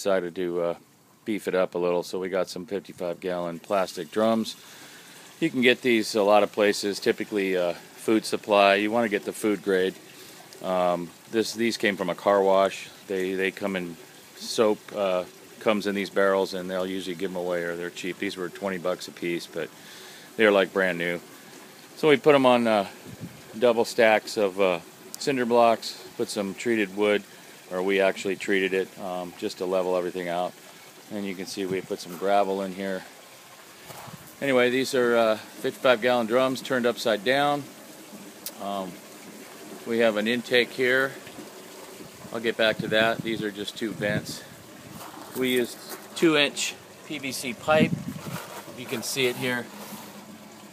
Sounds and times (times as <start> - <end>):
Speech: 0.0 - 4.6, 5.4 - 10.0, 10.6 - 19.7, 20.4 - 21.2, 22.0 - 23.0, 23.6 - 30.5, 31.1 - 33.1, 34.4 - 37.7, 38.5 - 39.0, 39.8 - 41.2, 42.3 - 44.5, 45.3 - 48.0, 48.8 - 49.7.